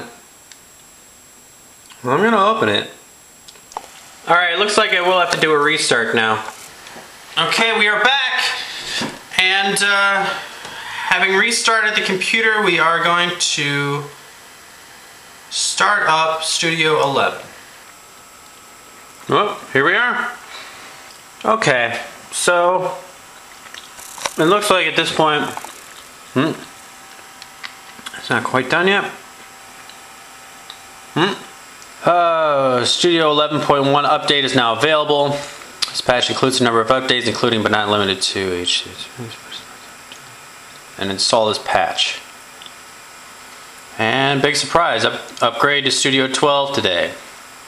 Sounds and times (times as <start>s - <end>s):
Speech: 0.0s - 0.2s, 1.9s - 3.0s, 4.2s - 6.6s, 7.4s - 14.2s, 15.5s - 17.6s, 19.2s - 20.4s, 21.4s - 23.2s, 24.4s - 25.7s, 26.4s - 26.7s, 28.1s - 29.2s, 31.2s - 39.7s, 41.0s - 42.3s, 44.0s - 47.2s
Inside, small room: 0.0s - 47.6s.